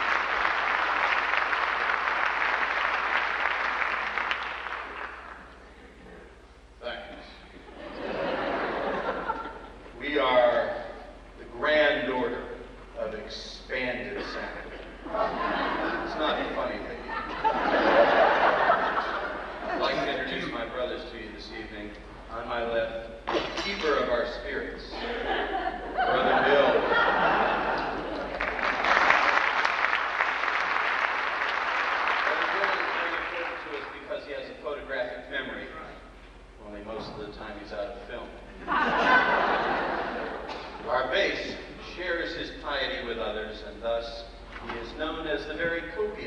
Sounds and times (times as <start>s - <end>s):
Speech: 5.8s - 7.5s, 10.0s - 14.8s, 16.0s - 17.3s, 19.7s - 25.3s, 32.2s - 36.0s, 36.6s - 38.4s, 40.8s - 46.2s.